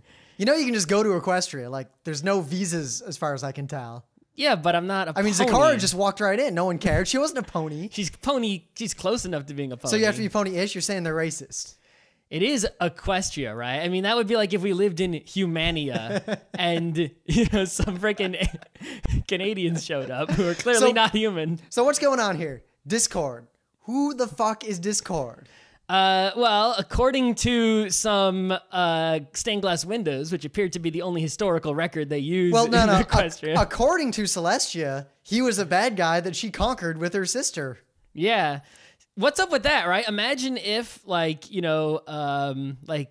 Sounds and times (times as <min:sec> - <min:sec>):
Speech: 0:00.4 - 0:18.6, 0:19.2 - 0:38.6, 0:39.2 - 0:43.1.